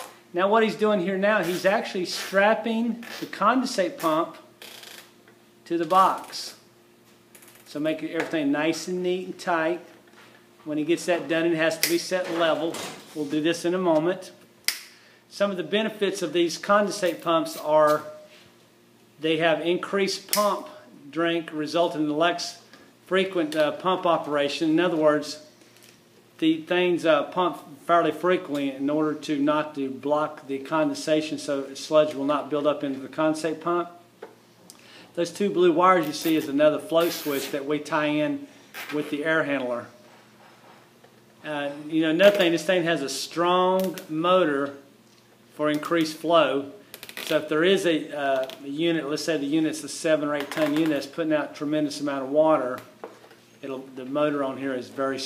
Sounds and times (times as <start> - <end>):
Speech: 0.4 - 4.5, 5.7 - 6.6, 7.7 - 9.9, 10.6 - 14.4, 15.3 - 18.2, 19.2 - 25.5, 26.4 - 34.0, 35.2 - 40.0, 41.4 - 44.9, 45.6 - 52.9, 53.6 - 55.2.